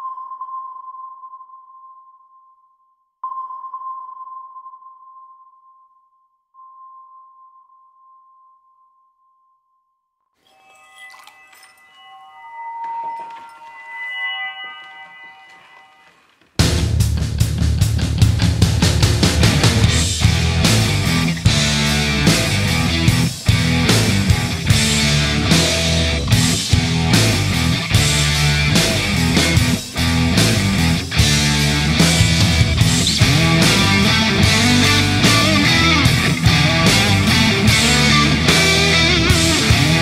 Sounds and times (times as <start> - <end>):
Music: 14.8 - 40.0.